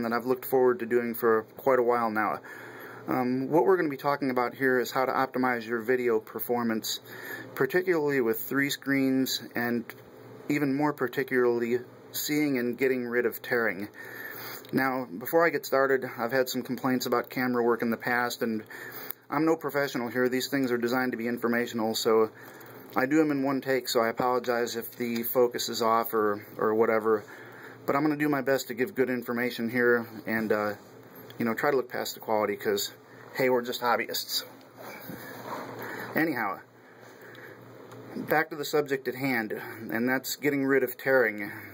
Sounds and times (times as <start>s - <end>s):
Speech: 0.0s - 2.4s, 3.1s - 14.0s, 14.7s - 18.7s, 19.3s - 22.4s, 23.0s - 27.3s, 27.9s - 30.8s, 31.4s - 34.6s, 36.1s - 36.7s, 38.2s - 41.7s.